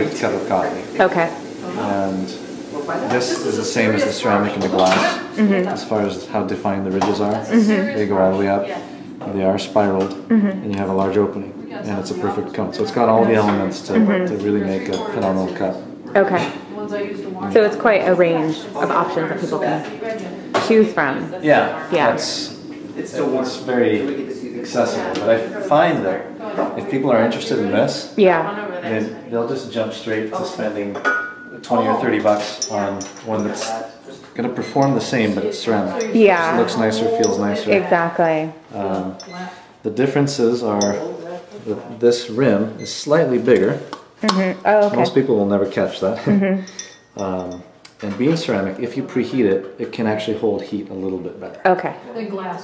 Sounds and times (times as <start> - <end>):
Speech: 31.6 - 37.7.